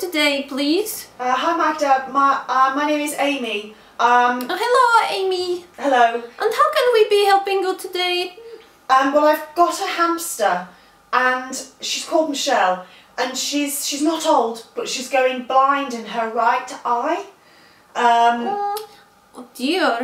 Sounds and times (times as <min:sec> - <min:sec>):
Speech: 0:00.0 - 0:17.4, 0:18.0 - 0:20.0.